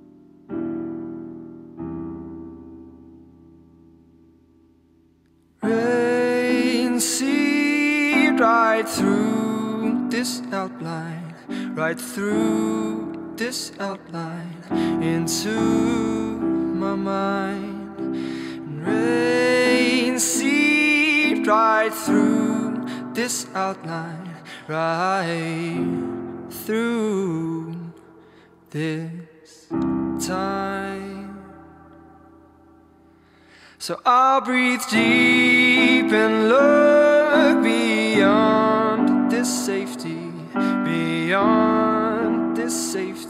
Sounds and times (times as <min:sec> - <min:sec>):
Soul music: 0:05.6 - 0:27.9, 0:34.7 - 0:43.2.